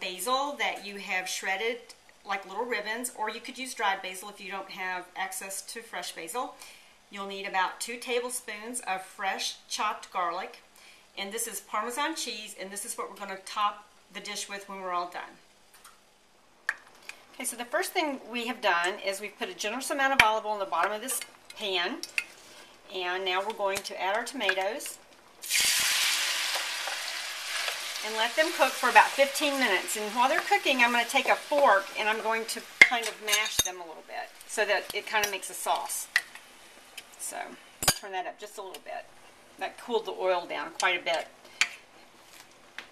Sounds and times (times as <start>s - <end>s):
Speech: 0.0s - 10.6s, 11.2s - 15.4s, 17.4s - 22.0s, 22.9s - 25.0s, 28.0s - 36.1s, 37.2s - 41.3s.